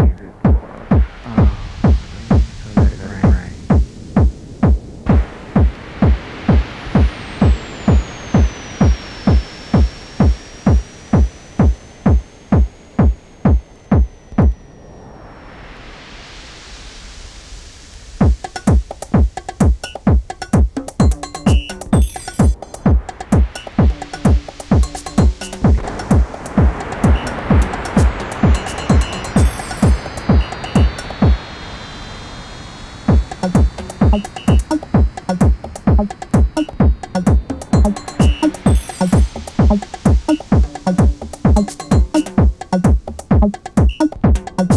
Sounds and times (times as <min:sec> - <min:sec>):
Music: 0:00.0 - 0:14.5, 0:18.2 - 0:31.4, 0:33.1 - 0:44.7.